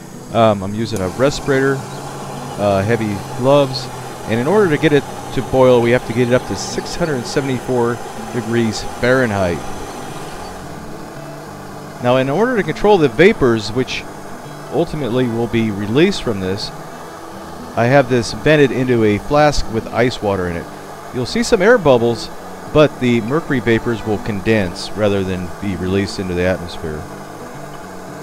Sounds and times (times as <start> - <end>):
Speech: 0.3 - 1.9, 2.6 - 9.6, 12.0 - 14.0, 14.7 - 16.8, 17.8 - 27.1.